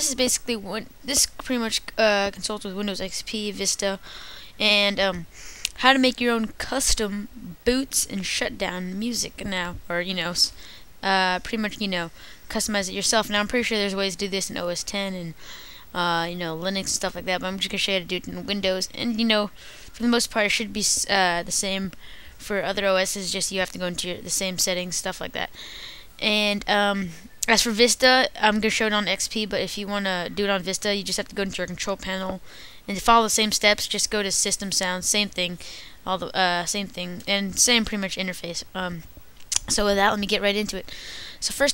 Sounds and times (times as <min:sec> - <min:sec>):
Speech: 0:00.0 - 0:04.0, 0:04.6 - 0:25.5, 0:26.2 - 0:41.7.